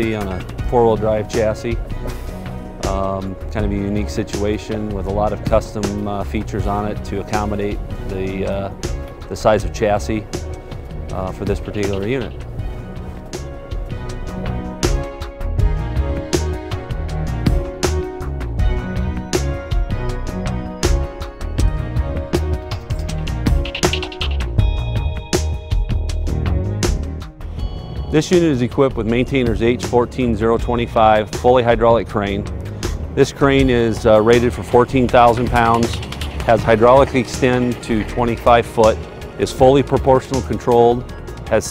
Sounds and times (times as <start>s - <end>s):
Speech: 0.0s - 1.8s, 2.8s - 8.7s, 9.3s - 10.2s, 11.1s - 12.4s, 28.1s - 32.4s, 33.2s - 41.7s
Music: 0.0s - 41.7s.